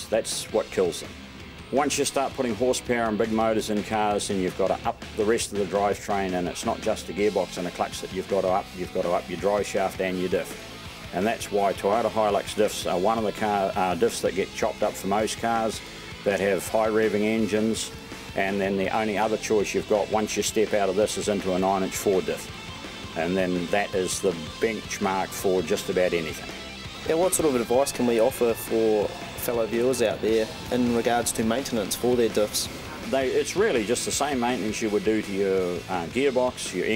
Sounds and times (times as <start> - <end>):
Speech: 0.0 - 1.1, 1.7 - 22.5, 23.2 - 36.9
Music: 0.0 - 36.9.